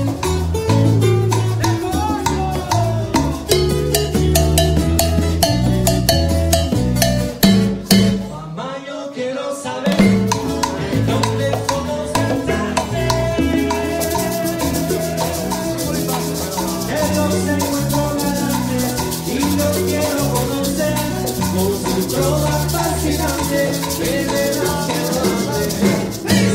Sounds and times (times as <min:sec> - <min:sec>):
Salsa music: 0:00.0 - 0:26.5.